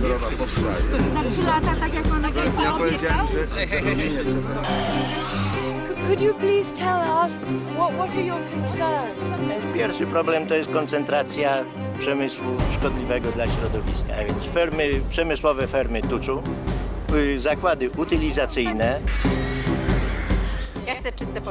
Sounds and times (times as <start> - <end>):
Music: 0.0 - 21.5.